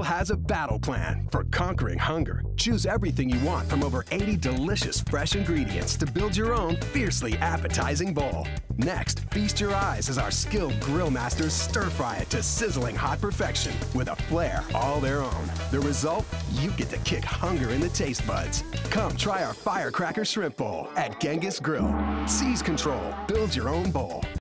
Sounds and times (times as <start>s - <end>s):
Music: 0.0s - 24.4s
Speech: 0.0s - 24.4s.